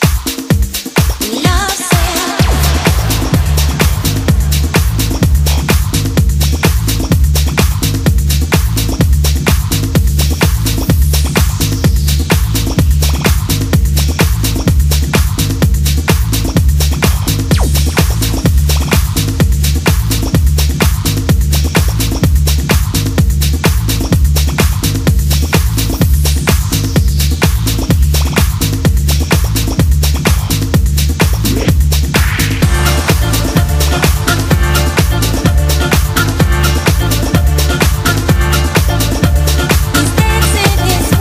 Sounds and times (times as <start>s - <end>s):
Disco: 0.0s - 41.2s
Rhythm and blues: 0.0s - 41.2s
Soundtrack music: 1.6s - 7.6s, 32.2s - 41.2s.